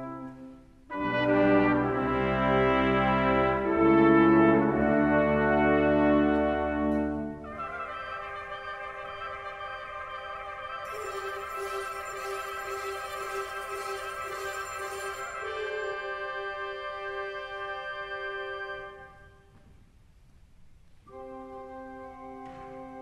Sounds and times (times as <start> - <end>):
Music: 0.0 - 19.8, 20.6 - 23.0.